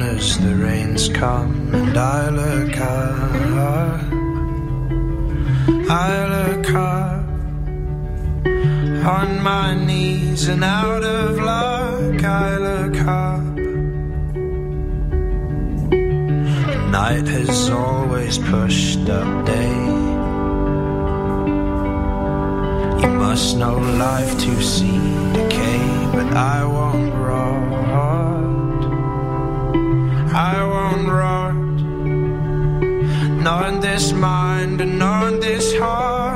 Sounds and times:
Music: 0:00.0 - 0:36.3.

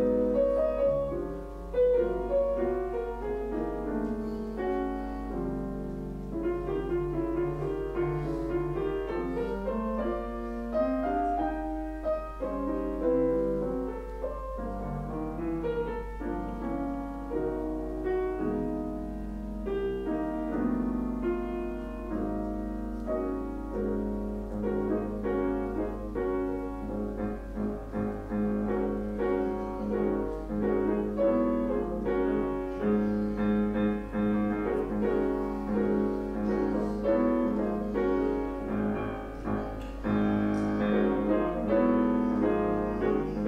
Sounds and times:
Music: 0:00.0 - 0:43.4.

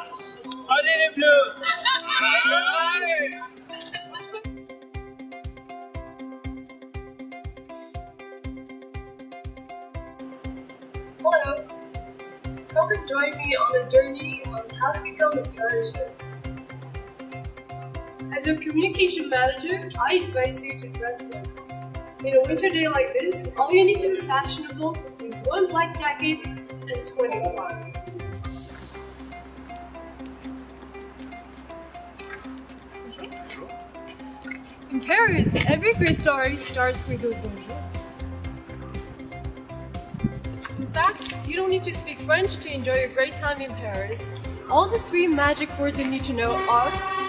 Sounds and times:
Music: 0:00.0 - 0:47.2
Speech: 0:12.8 - 0:16.1, 0:18.3 - 0:21.4, 0:22.3 - 0:28.1, 0:35.0 - 0:37.9, 0:40.8 - 0:46.9.

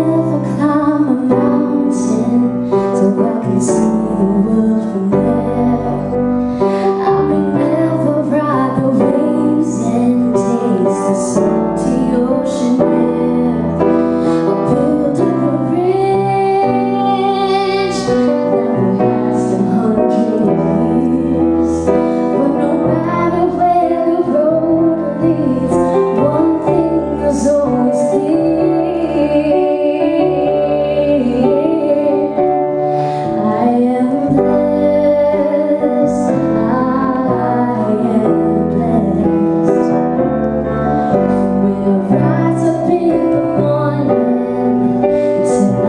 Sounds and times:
Female singing: 0:00.0 - 0:06.2, 0:06.8 - 0:13.9, 0:14.6 - 0:32.5, 0:33.4 - 0:39.9, 0:41.5 - 0:44.6, 0:45.4 - 0:45.8
Music: 0:00.0 - 0:45.8.

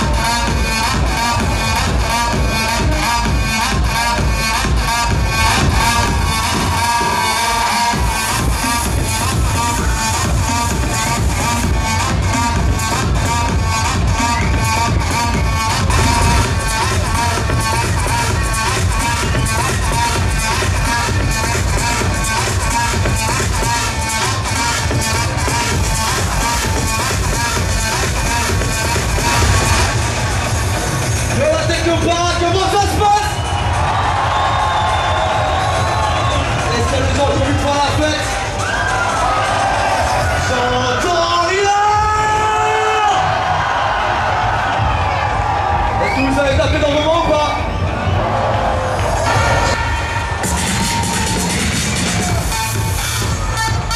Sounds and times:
Techno: 0:00.0 - 0:53.9
Speech: 0:31.4 - 0:33.4, 0:36.7 - 0:38.3, 0:40.4 - 0:42.6, 0:46.0 - 0:47.6.

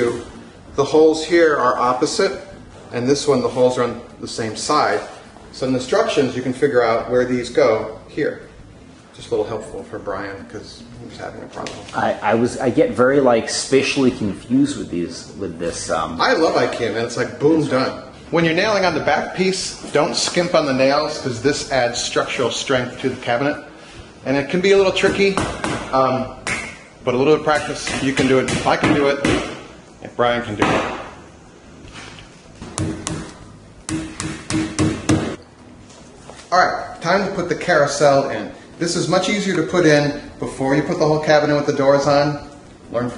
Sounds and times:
Speech: 0:09.2 - 0:26.4, 0:27.0 - 0:29.4, 0:36.5 - 0:43.1.

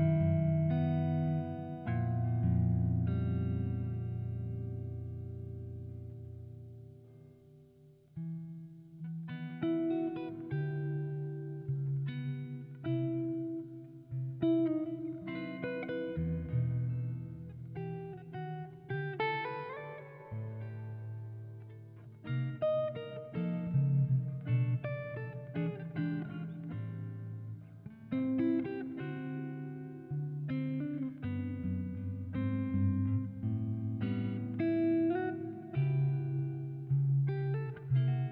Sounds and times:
Guitar: 0:00.0 - 0:38.3.

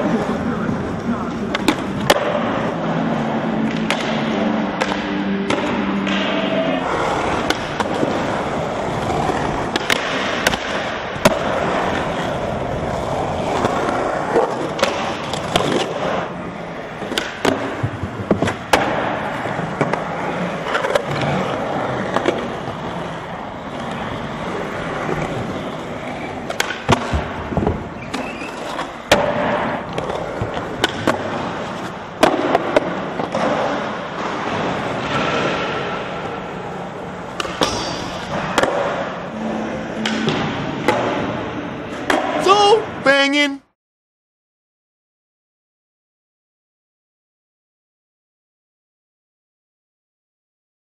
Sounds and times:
Skateboard: 0:00.0 - 0:42.7.

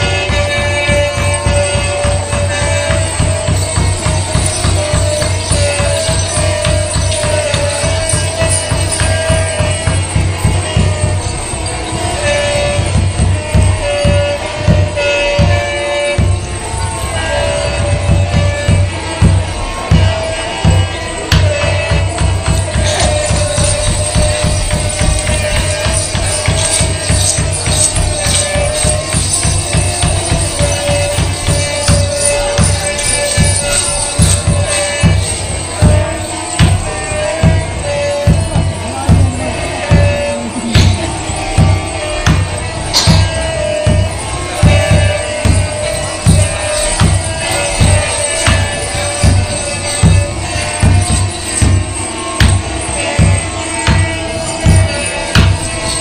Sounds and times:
Tambourine: 0:00.0 - 0:56.0.

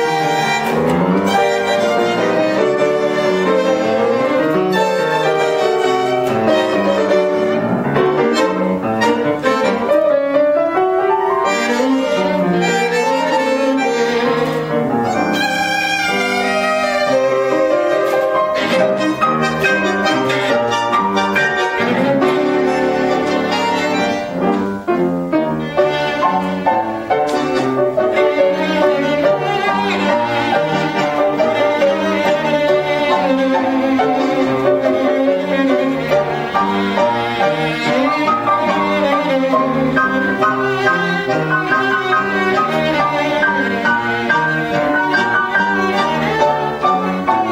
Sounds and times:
Piano: 0:00.0 - 0:47.5
String section: 0:00.0 - 0:47.5
Violin, fiddle: 0:00.0 - 0:47.5.

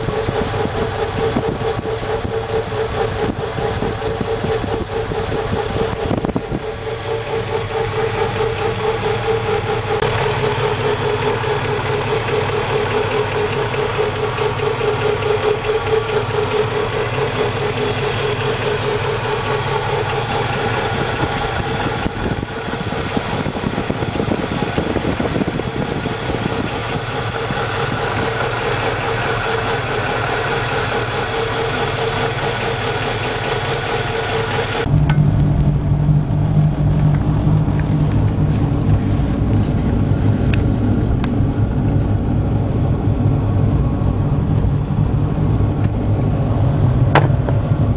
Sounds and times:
Idling: 0:00.0 - 0:47.9
Medium engine (mid frequency): 0:00.0 - 0:47.9
Vehicle: 0:00.0 - 0:47.9.

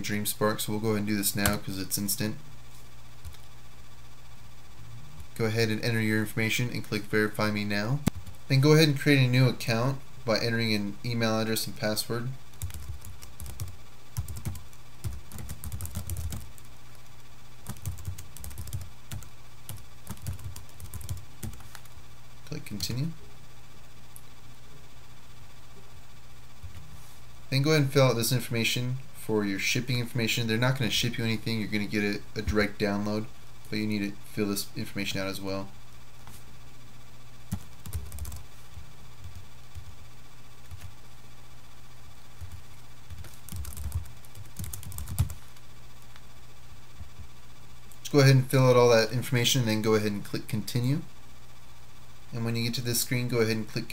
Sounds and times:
Speech: 0:00.0 - 0:02.4, 0:05.4 - 0:12.4, 0:22.5 - 0:23.2, 0:27.5 - 0:35.8, 0:48.0 - 0:51.1, 0:52.3 - 0:53.9
Computer keyboard: 0:12.6 - 0:16.7, 0:17.7 - 0:21.9, 0:37.5 - 0:38.4, 0:42.4 - 0:45.4.

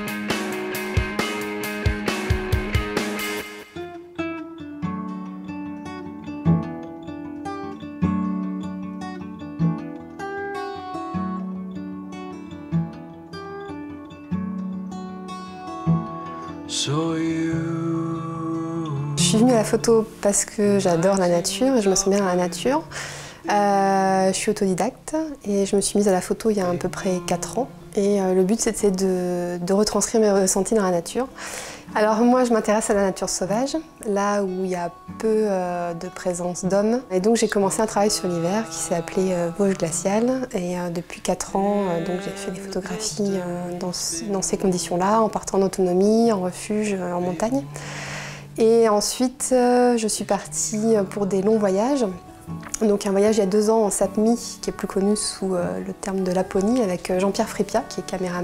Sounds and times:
Music: 0:00.0 - 0:58.4
Speech: 0:19.2 - 0:22.9, 0:23.5 - 0:31.3, 0:31.9 - 0:47.7, 0:48.6 - 0:52.2, 0:52.8 - 0:58.4.

